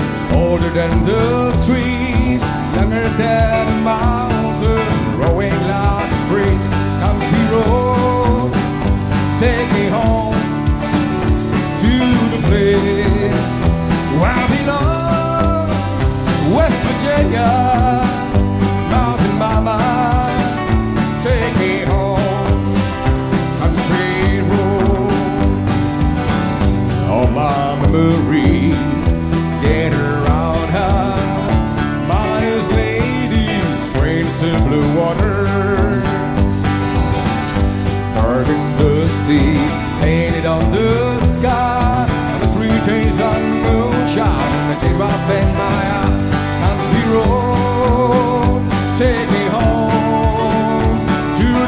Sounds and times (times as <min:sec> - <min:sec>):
Country: 0:00.0 - 0:51.6
Musical instrument: 0:00.0 - 0:51.6.